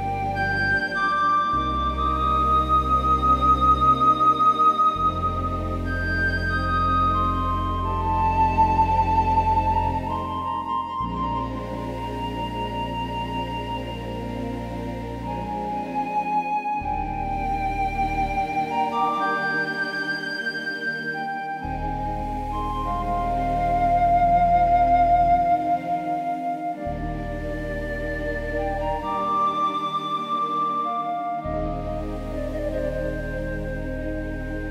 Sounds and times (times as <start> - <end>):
New-age music: 0.0 - 34.7.